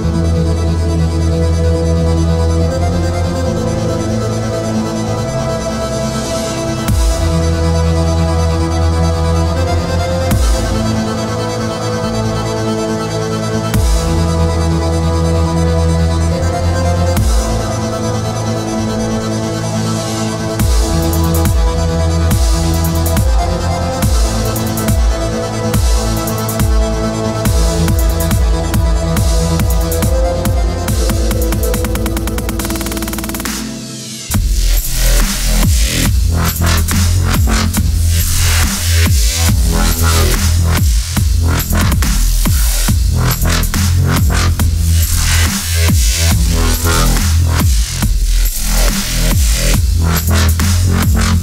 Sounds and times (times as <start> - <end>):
Dubstep: 0.0 - 51.4.